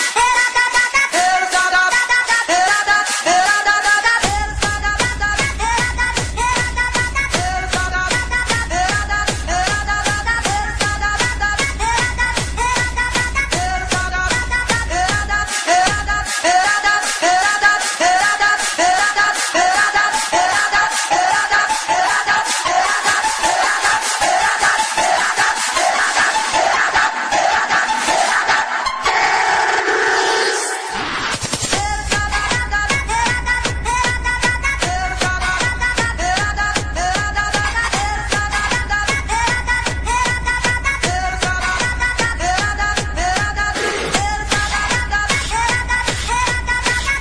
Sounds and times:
Techno: 0.0 - 47.2.

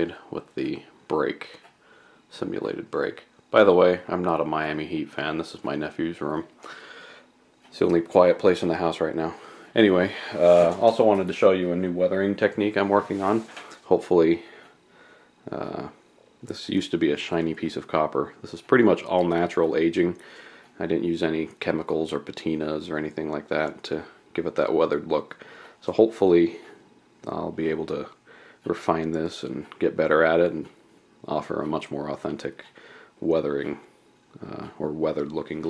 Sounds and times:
Speech: 0.0 - 1.7, 2.3 - 6.6, 7.7 - 14.6, 15.4 - 20.2, 20.8 - 35.6.

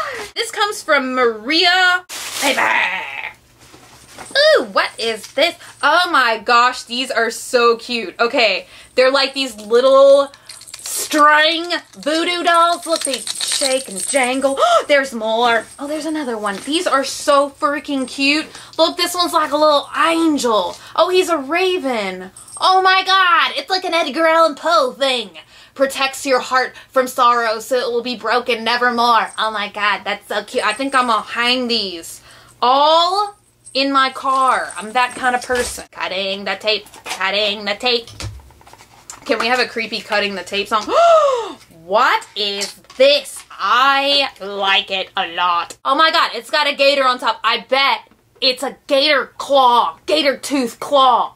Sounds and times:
Speech: 0.0 - 3.4, 4.4 - 10.3, 10.9 - 38.1, 39.2 - 51.3
Inside, small room: 0.0 - 51.3.

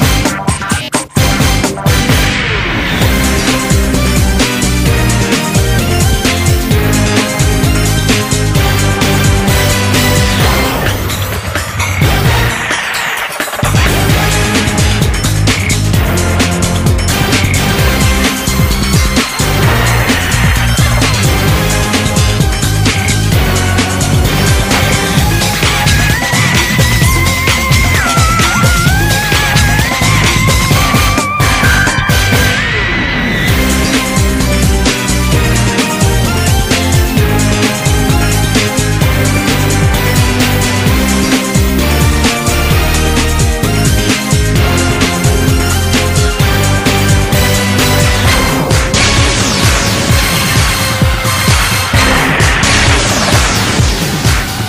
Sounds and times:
Music: 0.0 - 54.6.

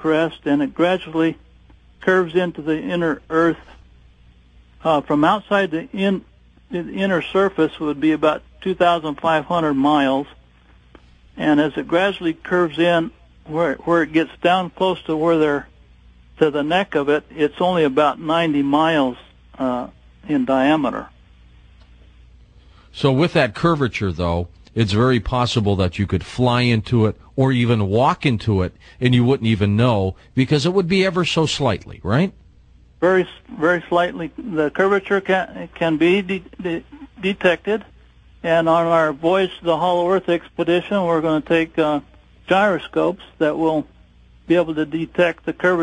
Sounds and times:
Speech: 0.0 - 1.4, 2.0 - 3.8, 4.8 - 10.4, 11.4 - 15.7, 16.4 - 21.2, 22.9 - 32.4, 33.0 - 45.8.

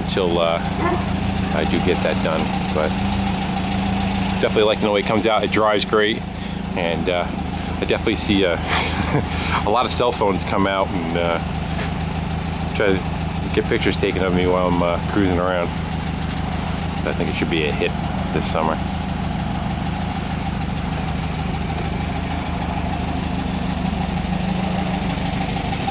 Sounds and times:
Truck: 0.0 - 25.9.

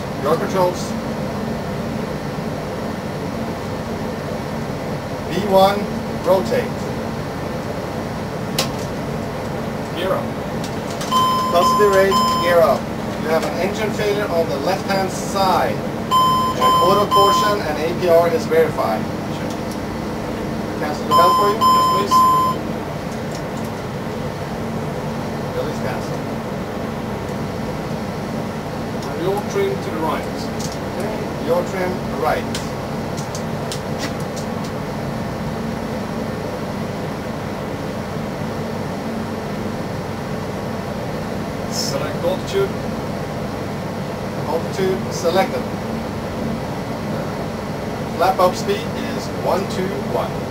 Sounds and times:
Speech: 0.2 - 1.0, 5.3 - 6.9, 9.9 - 10.3, 11.5 - 15.8, 16.6 - 19.6, 20.8 - 22.2, 25.5 - 26.2, 29.0 - 32.6, 41.7 - 42.8, 44.4 - 45.7, 48.2 - 50.4.

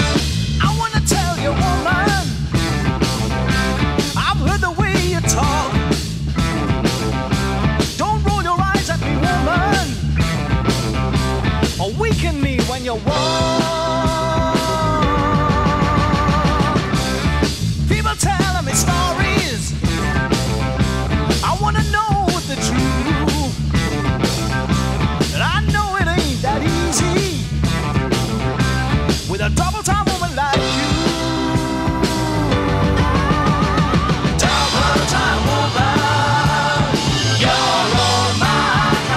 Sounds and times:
Music: 0.0 - 39.1
Speech: 0.6 - 2.3, 4.2 - 5.8, 8.0 - 10.0, 11.8 - 15.2, 17.9 - 20.3, 21.4 - 23.6, 25.3 - 27.5, 29.3 - 32.5.

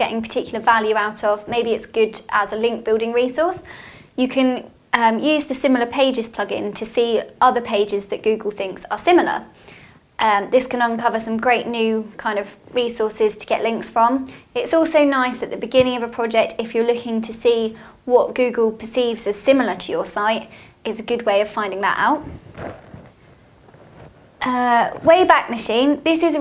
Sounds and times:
Speech: 0.0 - 9.5, 10.2 - 22.4, 24.4 - 26.4.

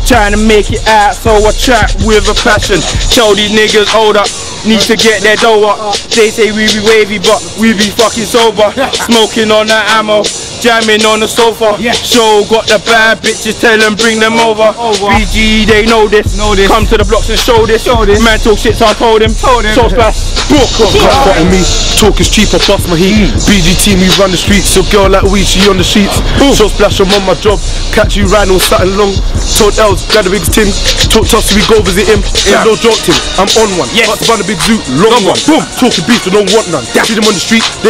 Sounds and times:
Music: 0.0 - 37.9.

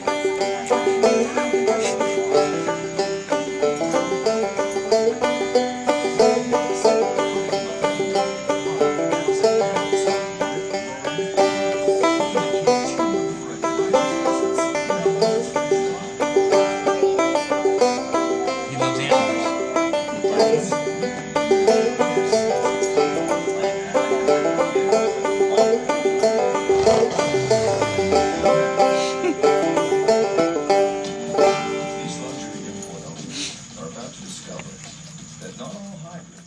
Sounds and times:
Banjo: 0.0 - 34.7.

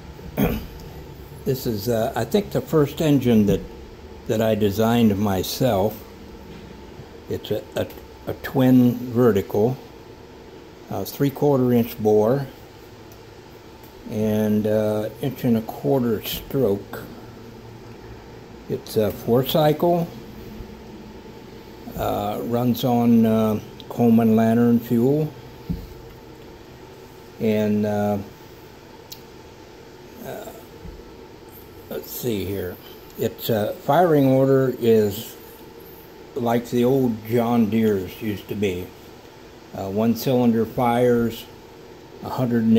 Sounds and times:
Speech: 1.4 - 3.7, 4.3 - 6.1, 7.3 - 9.9, 10.9 - 12.6, 14.0 - 17.2, 18.7 - 20.2, 21.9 - 25.4, 27.4 - 28.4, 30.2 - 30.7, 31.9 - 35.4, 36.4 - 39.0, 39.7 - 41.6, 42.2 - 42.7.

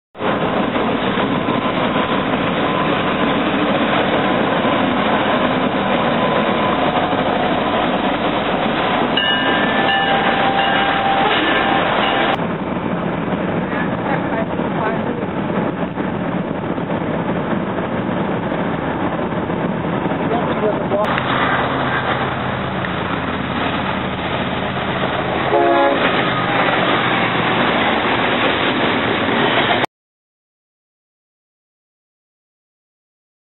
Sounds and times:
Railroad car, train wagon: 0.2 - 29.9
Train: 0.2 - 29.9.

